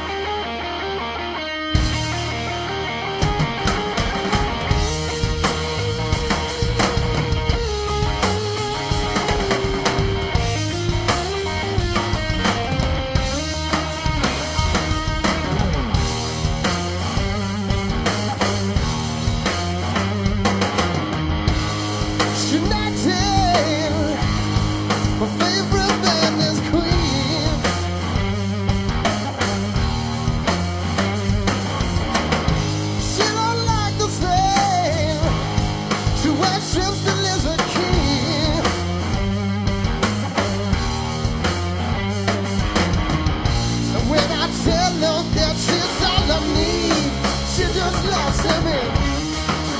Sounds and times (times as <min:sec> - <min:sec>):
Rock and roll: 0:00.0 - 0:49.7.